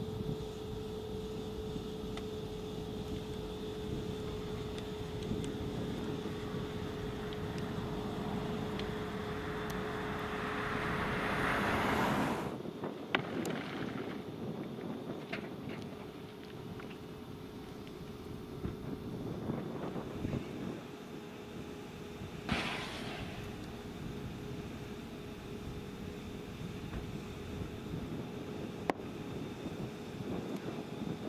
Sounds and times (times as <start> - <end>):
Fire: 0.0 - 31.2
Outside, rural or natural: 0.0 - 31.2
Vehicle: 0.0 - 31.2.